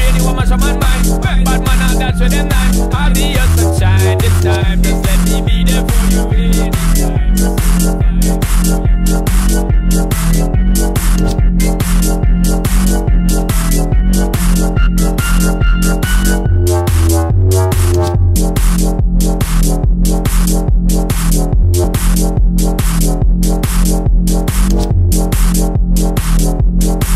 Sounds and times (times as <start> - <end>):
Electronica: 0.0 - 27.1.